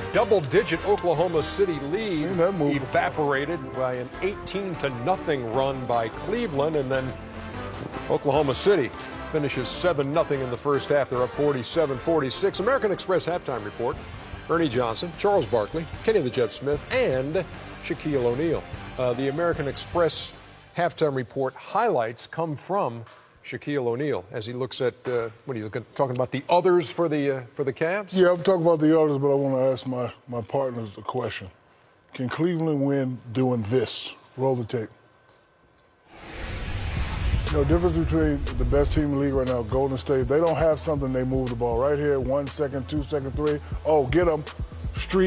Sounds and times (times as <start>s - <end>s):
Music: 0.0s - 21.2s, 36.2s - 45.2s.